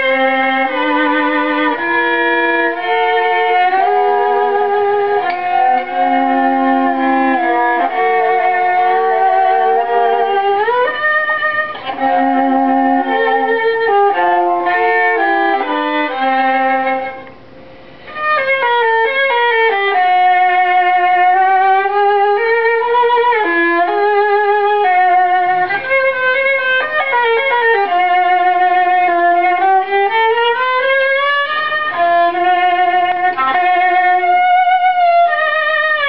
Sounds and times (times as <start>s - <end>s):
Violin, fiddle: 0.0s - 36.0s.